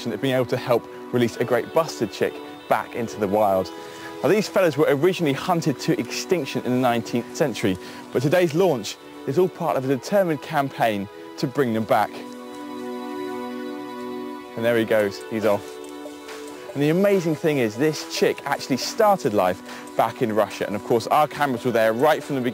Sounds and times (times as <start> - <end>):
Speech: 0.0 - 12.2, 14.6 - 15.6, 16.8 - 22.5
Music: 0.0 - 22.5.